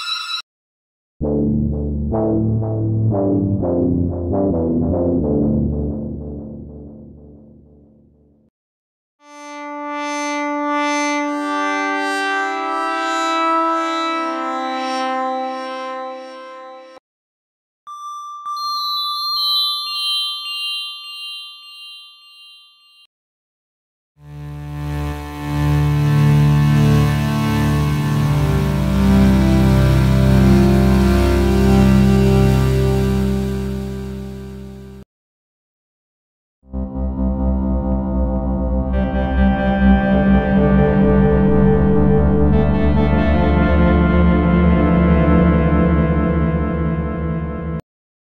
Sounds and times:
Synthesizer: 1.2s - 7.7s, 9.2s - 17.0s, 24.2s - 35.0s, 36.7s - 47.8s.

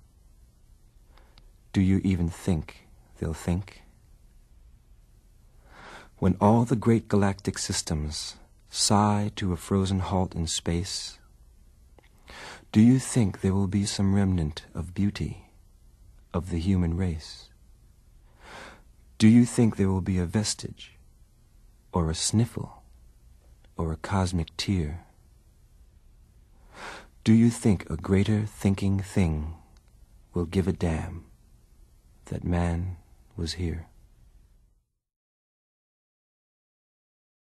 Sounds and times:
Speech: 1.7s - 3.9s, 6.2s - 11.3s, 12.6s - 15.6s, 16.3s - 17.6s, 19.2s - 21.0s, 21.9s - 22.9s, 23.7s - 25.2s, 27.2s - 31.4s, 32.2s - 34.0s.

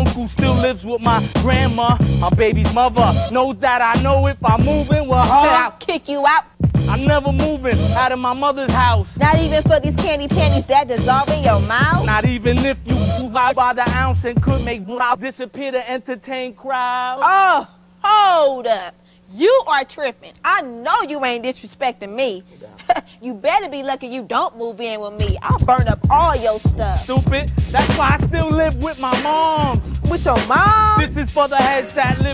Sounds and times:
Music: 0.0s - 15.2s, 24.3s - 32.3s
Speech: 0.0s - 29.1s.

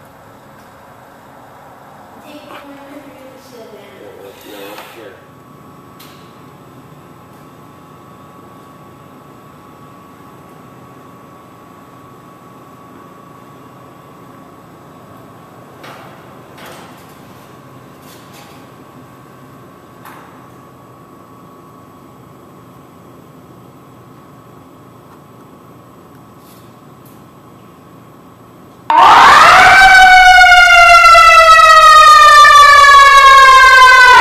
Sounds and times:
Siren: 28.9s - 34.2s.

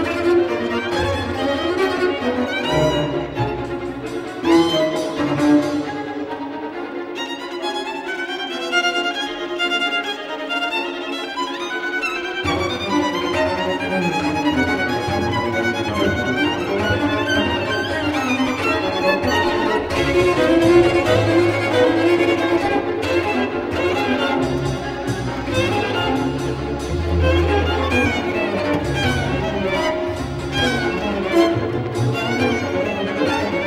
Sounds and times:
Orchestra: 0.0s - 33.6s
String section: 0.0s - 33.6s.

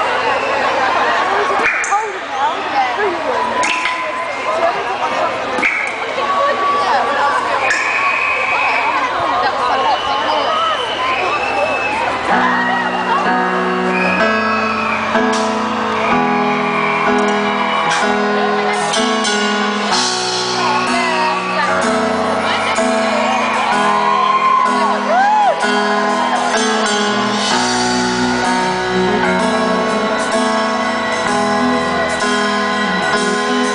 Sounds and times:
Music: 12.1s - 33.7s.

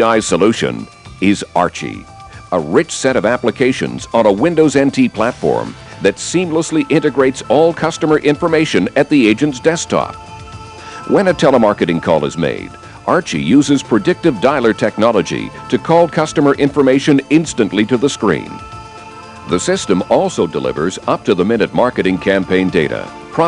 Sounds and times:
Speech: 0.0s - 10.2s, 11.1s - 18.6s, 19.5s - 23.4s
Music: 0.0s - 23.4s.

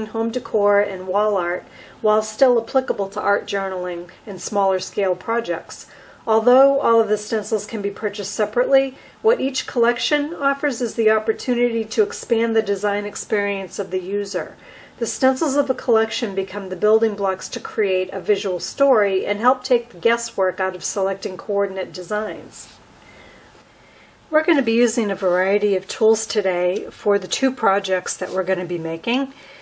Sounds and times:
Speech: 0.0s - 22.8s, 24.3s - 29.4s.

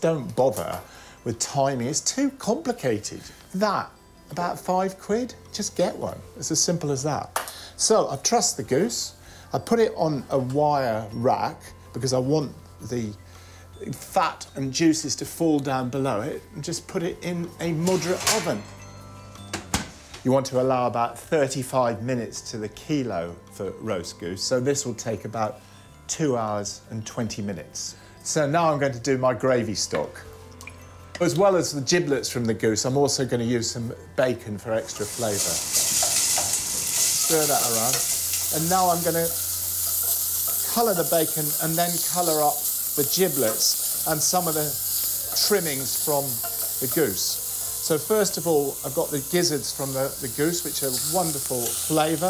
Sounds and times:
Speech: 0.0s - 13.2s, 13.8s - 18.6s, 20.2s - 30.2s, 31.2s - 35.6s, 37.2s - 39.4s, 40.6s - 52.3s
Music: 0.0s - 52.3s.

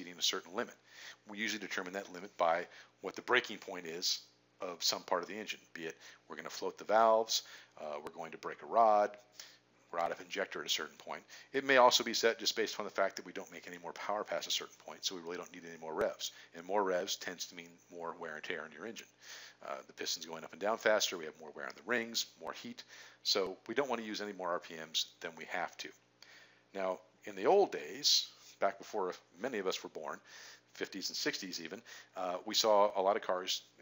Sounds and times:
Speech: 0.0s - 9.2s, 9.9s - 26.0s, 26.7s - 33.8s.

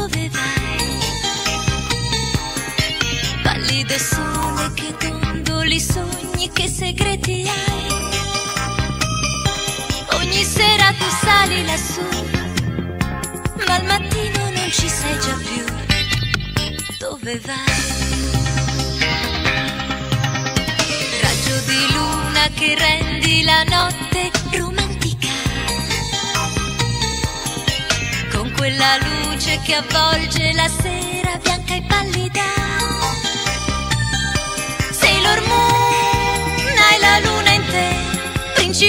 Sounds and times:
Music: 0.0s - 38.8s.

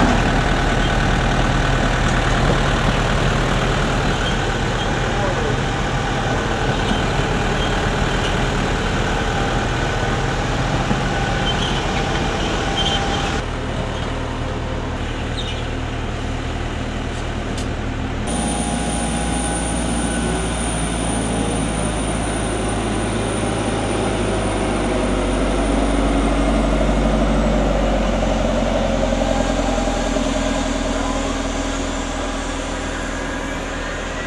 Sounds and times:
Fixed-wing aircraft, airplane: 0.0s - 34.2s
Outside, urban or manmade: 0.0s - 34.2s.

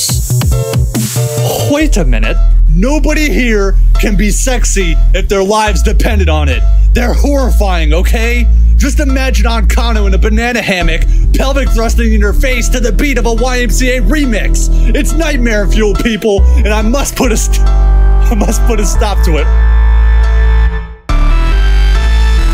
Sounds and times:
Dubstep: 0.0s - 2.7s
Speech: 1.4s - 17.7s, 18.3s - 19.5s.

